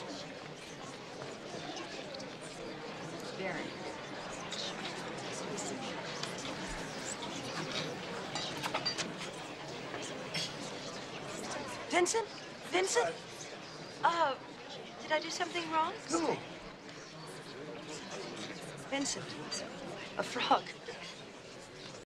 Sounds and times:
Speech: 0:00.0 - 0:22.0.

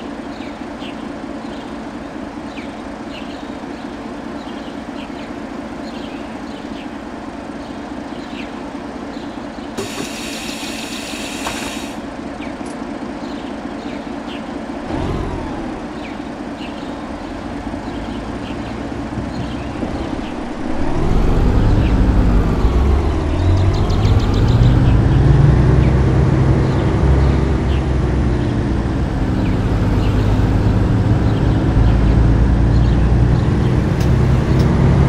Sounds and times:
Car: 0:00.0 - 0:35.0
Engine: 0:00.0 - 0:35.0.

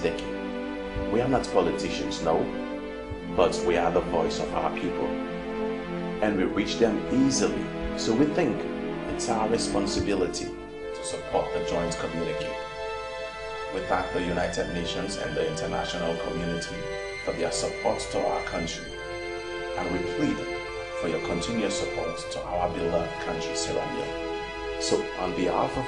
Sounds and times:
Speech: 0:00.0 - 0:00.3, 0:01.0 - 0:02.6, 0:03.4 - 0:05.2, 0:06.2 - 0:12.6, 0:13.8 - 0:18.9, 0:19.8 - 0:20.4, 0:21.0 - 0:24.1, 0:24.8 - 0:25.8
Music: 0:00.0 - 0:25.8.

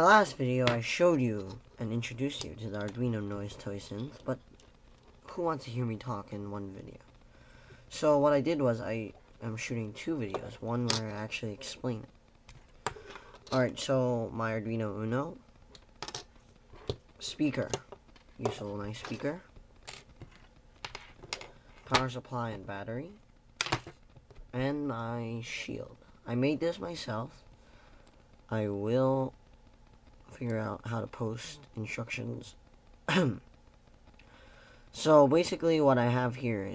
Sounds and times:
Speech: 0:00.0 - 0:04.4, 0:05.3 - 0:07.0, 0:07.9 - 0:12.1, 0:13.5 - 0:15.4, 0:17.2 - 0:19.5, 0:21.9 - 0:23.2, 0:24.5 - 0:27.4, 0:28.5 - 0:29.4, 0:30.3 - 0:33.5, 0:35.0 - 0:36.7.

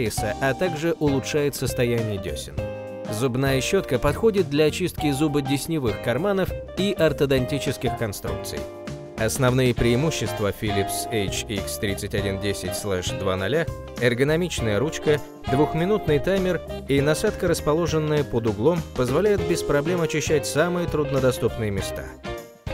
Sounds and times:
Speech: 0:00.0 - 0:22.2
Music: 0:00.0 - 0:22.7.

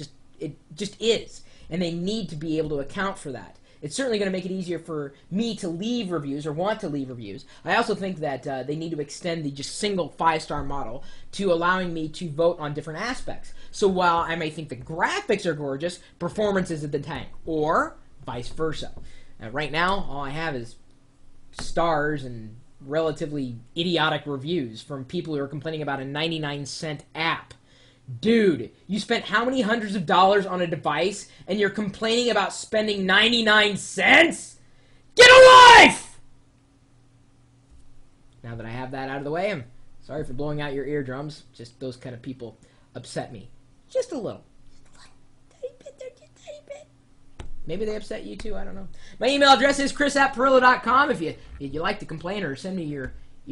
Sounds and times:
Speech: 0:00.0 - 0:20.8, 0:21.6 - 0:34.6, 0:35.2 - 0:36.2, 0:38.4 - 0:46.9, 0:47.6 - 0:53.5
Inside, small room: 0:00.0 - 0:53.5.

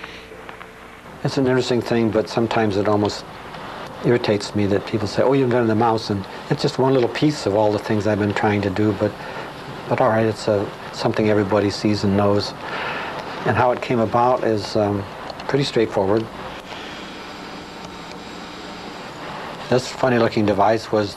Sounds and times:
Speech: 0:01.2 - 0:03.3, 0:04.0 - 0:09.2, 0:09.8 - 0:12.6, 0:13.4 - 0:16.3, 0:19.6 - 0:21.1.

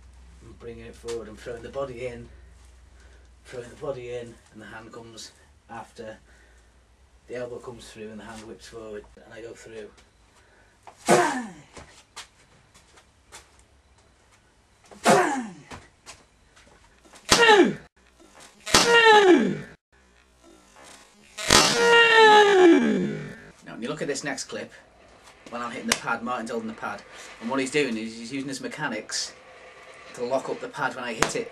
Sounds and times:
Speech: 0:00.4 - 0:02.3, 0:03.5 - 0:06.2, 0:07.3 - 0:10.0, 0:23.6 - 0:24.8, 0:25.5 - 0:29.4, 0:30.2 - 0:31.5.

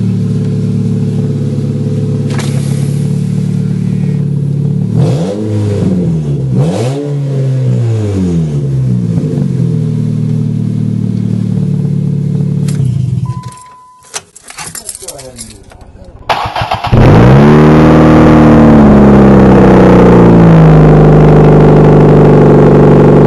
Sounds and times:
Vehicle: 0:00.0 - 0:23.2
Speech: 0:14.6 - 0:16.3.

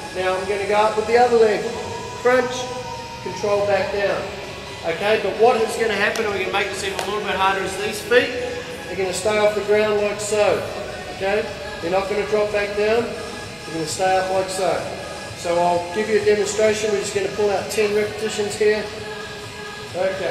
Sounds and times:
Music: 0:00.0 - 0:20.3
Speech: 0:04.9 - 0:13.1, 0:13.7 - 0:18.9, 0:20.0 - 0:20.3.

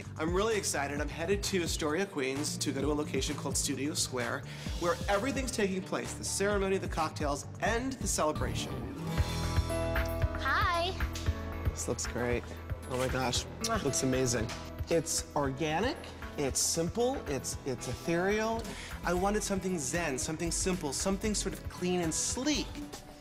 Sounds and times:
Music: 0:00.0 - 0:23.2.

